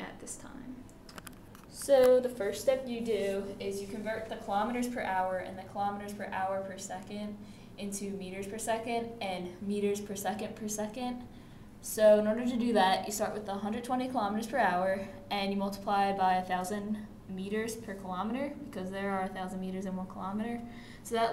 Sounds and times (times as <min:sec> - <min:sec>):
Speech: 0:00.0 - 0:00.8, 0:01.7 - 0:21.3.